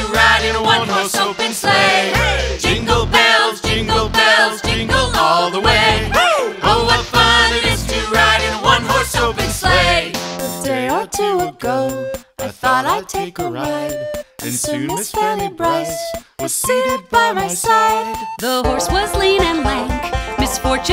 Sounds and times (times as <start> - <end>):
Jingle (music): 0.0 - 20.9.